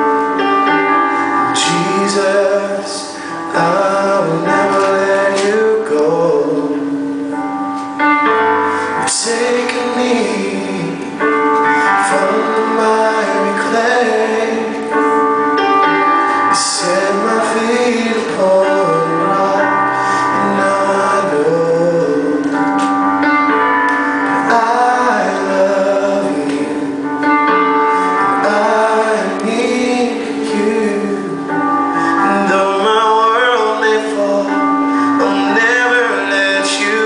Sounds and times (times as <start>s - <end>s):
Music: 0.0s - 37.0s
Male singing: 1.6s - 7.0s, 9.0s - 11.2s, 12.0s - 15.0s, 16.6s - 22.7s, 24.5s - 27.0s, 28.4s - 31.6s, 32.2s - 37.0s.